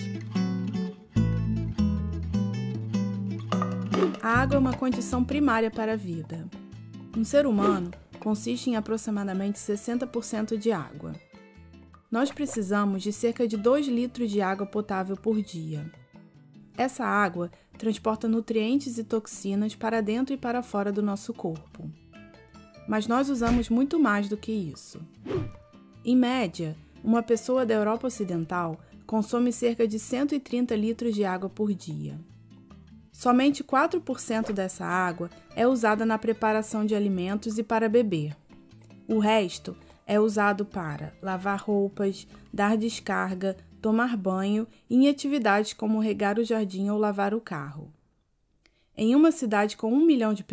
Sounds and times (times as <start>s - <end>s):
Music: 0.0s - 47.9s, 49.0s - 50.5s
Speech: 4.2s - 6.6s, 7.2s - 11.2s, 12.1s - 15.9s, 16.8s - 22.0s, 22.9s - 25.1s, 26.1s - 32.3s, 33.2s - 38.4s, 39.1s - 48.0s, 49.0s - 50.5s.